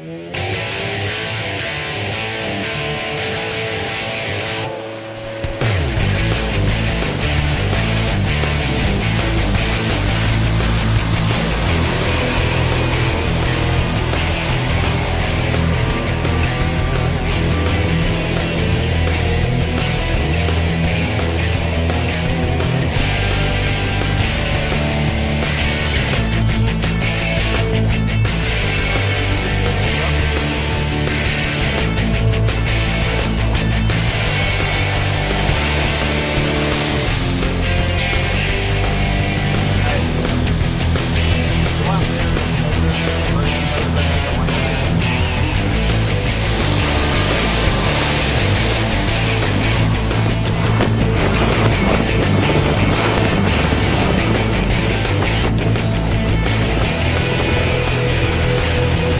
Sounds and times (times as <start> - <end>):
Music: 0.0 - 59.1
Motorboat, speedboat: 3.3 - 59.1
Speech: 29.2 - 30.7, 39.7 - 40.4, 41.3 - 45.2.